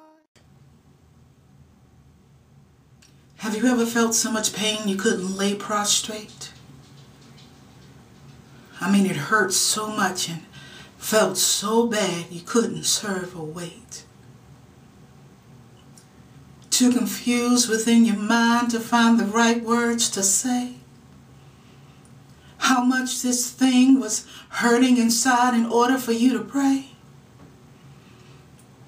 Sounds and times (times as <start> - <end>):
Speech: 3.4 - 6.6, 8.8 - 14.1, 16.7 - 20.8, 22.6 - 27.0.